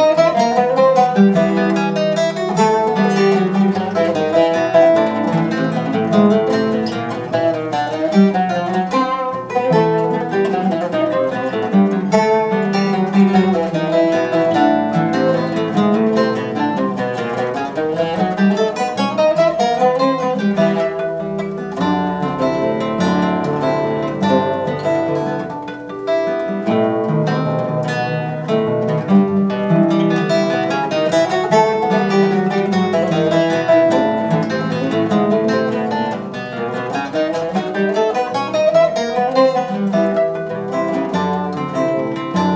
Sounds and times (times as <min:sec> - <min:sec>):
Acoustic guitar: 0:00.0 - 0:42.5.